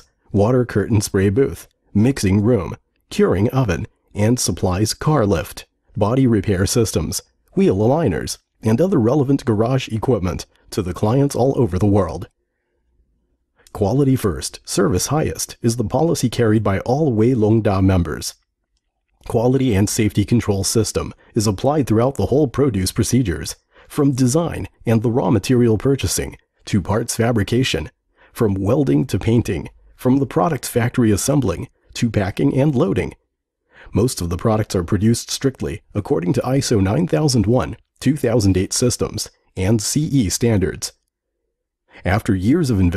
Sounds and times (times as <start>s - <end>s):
Speech: 0.0s - 12.3s, 13.7s - 18.4s, 19.2s - 33.2s, 33.9s - 41.0s, 42.0s - 42.9s.